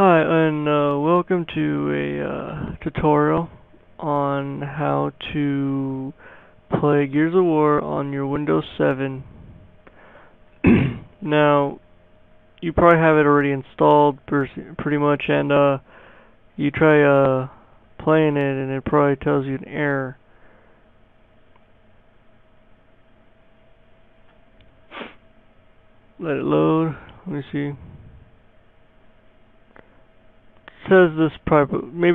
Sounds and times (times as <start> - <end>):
Speech: 0.0 - 9.3, 11.0 - 11.8, 12.6 - 15.9, 16.6 - 20.2, 26.2 - 28.0, 30.7 - 32.1.